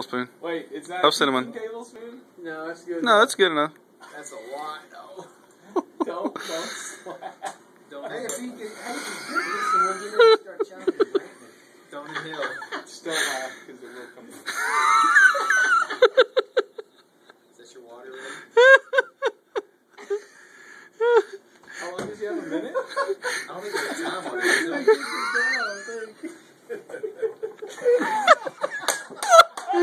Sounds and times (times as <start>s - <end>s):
Giggle: 9.0s - 13.0s, 14.4s - 17.1s, 18.6s - 20.3s, 22.3s - 29.8s.